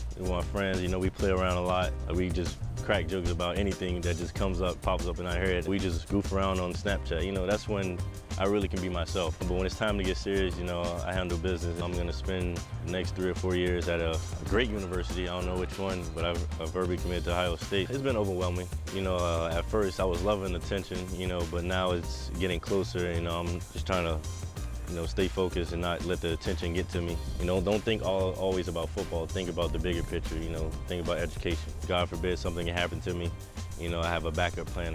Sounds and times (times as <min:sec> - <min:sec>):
Music: 0:00.0 - 0:34.9
Speech: 0:00.2 - 0:24.2, 0:24.9 - 0:34.9.